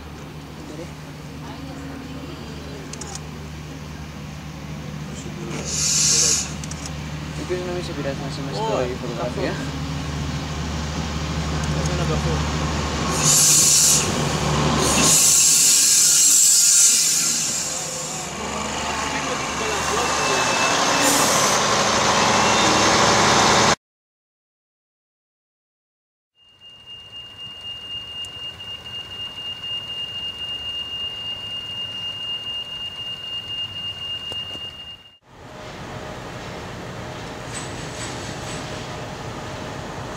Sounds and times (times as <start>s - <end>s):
Railroad car, train wagon: 0.0s - 23.8s, 26.4s - 40.1s
Subway, metro, underground: 0.0s - 23.8s, 26.4s - 40.1s
Train: 0.0s - 23.8s, 26.4s - 40.1s.